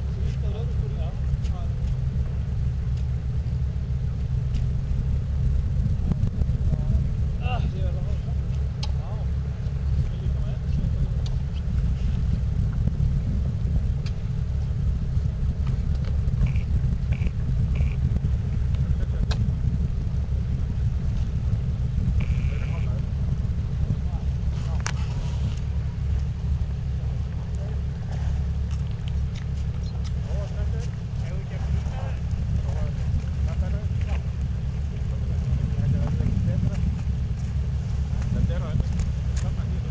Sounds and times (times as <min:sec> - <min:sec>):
Vehicle: 0:00.0 - 0:39.9
Speech: 0:00.1 - 0:02.1, 0:06.6 - 0:11.5, 0:18.8 - 0:19.5, 0:22.2 - 0:23.1, 0:23.8 - 0:25.2, 0:27.0 - 0:28.4, 0:29.7 - 0:37.0, 0:38.2 - 0:39.9.